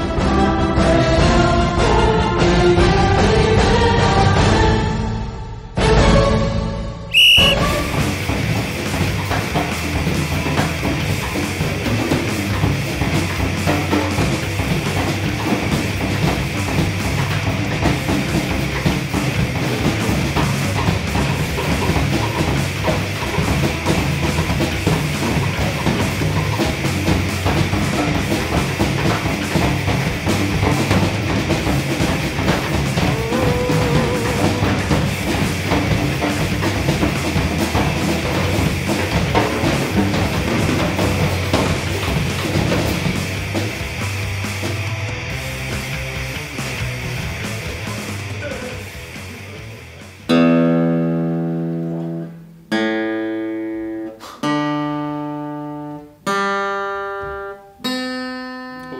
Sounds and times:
Strum: 0:07.1 - 0:49.6.

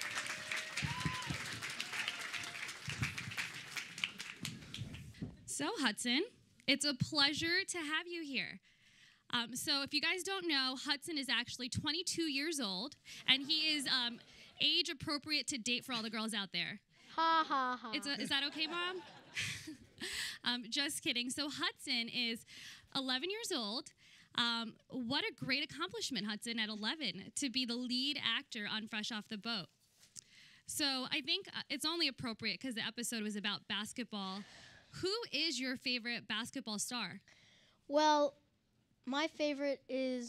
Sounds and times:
Speech: 0:09.3 - 0:16.8, 0:17.4 - 0:19.0, 0:20.4 - 0:22.4, 0:23.0 - 0:29.7, 0:30.7 - 0:34.4, 0:37.9 - 0:38.4, 0:39.1 - 0:40.2.

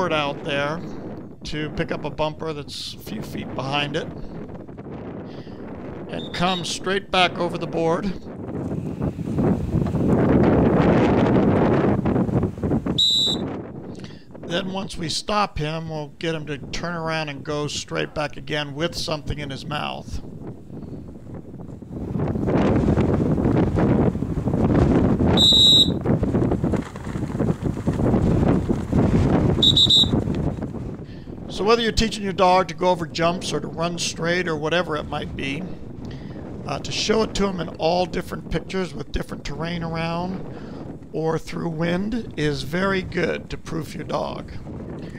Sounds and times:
Speech: 0:00.0 - 0:00.9, 0:01.5 - 0:04.1, 0:06.1 - 0:08.2, 0:14.5 - 0:20.2, 0:31.5 - 0:35.8, 0:36.7 - 0:40.4, 0:41.2 - 0:44.6.

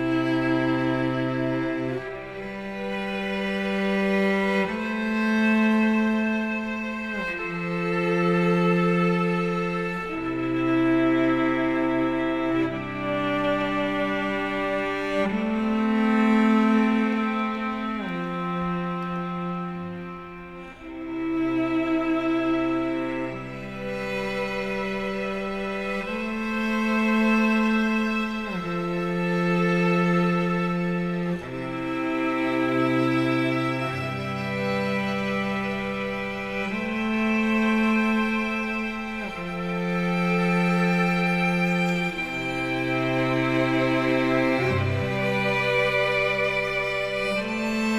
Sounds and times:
Music: 0:00.0 - 0:47.9.

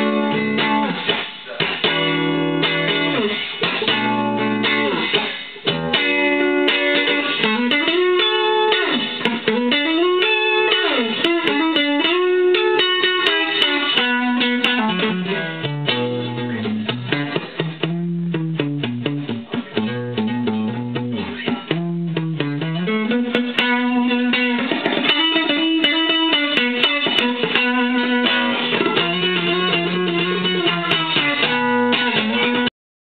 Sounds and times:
Electric guitar: 0:00.0 - 0:32.7.

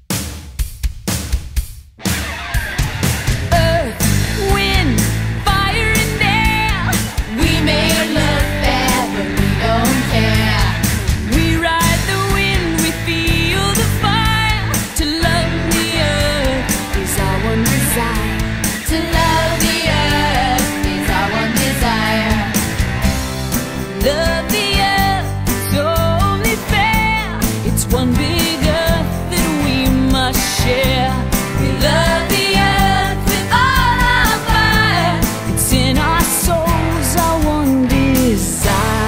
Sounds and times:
Music: 0:00.0 - 0:39.0.

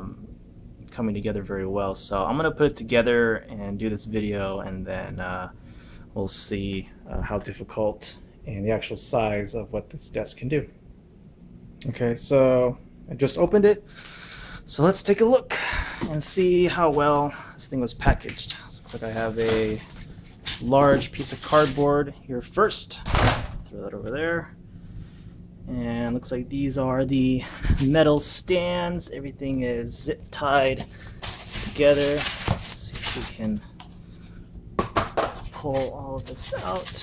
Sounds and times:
Speech: 0:00.9 - 0:05.6, 0:06.2 - 0:10.7, 0:11.8 - 0:13.8, 0:14.7 - 0:19.8, 0:20.6 - 0:23.1, 0:23.7 - 0:24.6, 0:25.7 - 0:30.9, 0:31.6 - 0:33.7, 0:35.5 - 0:37.0.

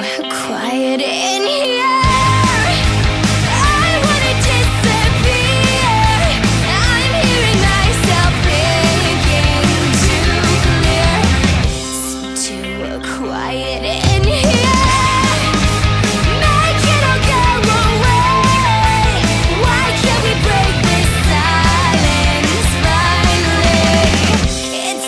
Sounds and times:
Exciting music: 0:02.0 - 0:25.0.

